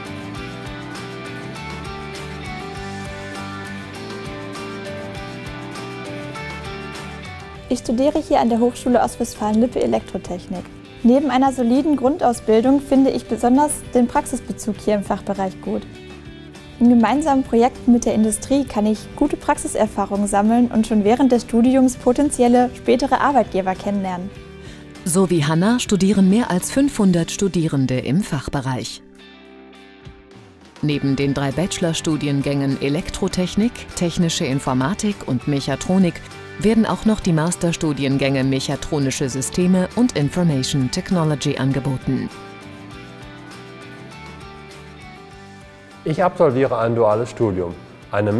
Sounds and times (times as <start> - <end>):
Music: 0.0 - 48.3
Speech: 7.7 - 15.8, 16.8 - 24.3, 25.1 - 29.0, 30.8 - 42.3, 46.1 - 48.3.